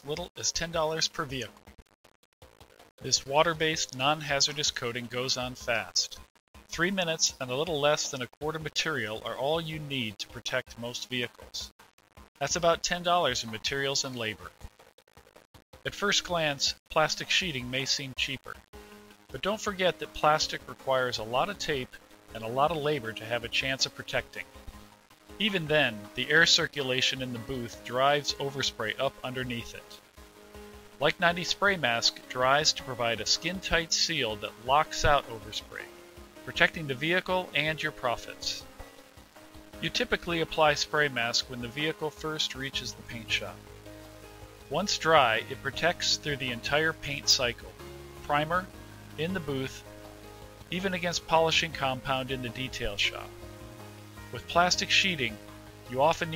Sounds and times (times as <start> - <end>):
Speech: 0.0 - 1.5, 3.0 - 6.2, 6.8 - 11.7, 12.4 - 14.5, 15.9 - 18.6, 19.4 - 24.5, 25.4 - 30.0, 31.0 - 35.9, 36.5 - 38.6, 39.8 - 43.6, 44.7 - 47.7, 48.3 - 49.8, 50.7 - 53.3, 54.4 - 56.3
Music: 0.0 - 56.3.